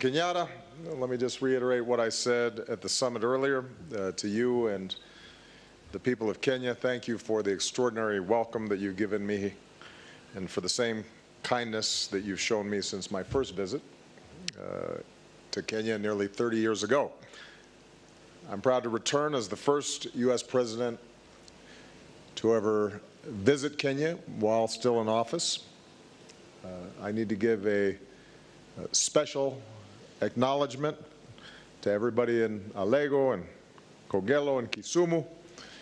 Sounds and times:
Male speech, man speaking: 0.0 - 5.0, 5.9 - 9.6, 10.4 - 13.9, 14.5 - 17.2, 18.5 - 21.0, 22.4 - 25.7, 26.6 - 28.0, 28.8 - 31.1, 31.8 - 35.4
Narration, monologue: 0.0 - 35.8.

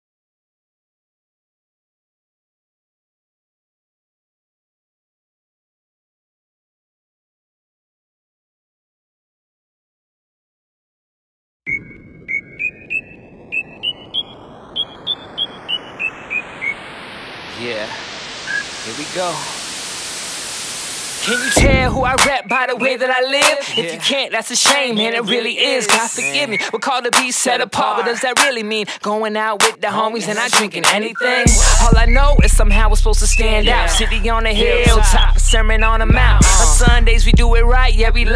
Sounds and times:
Happy music: 21.2 - 28.6, 29.7 - 38.3
Independent music: 21.2 - 38.3.

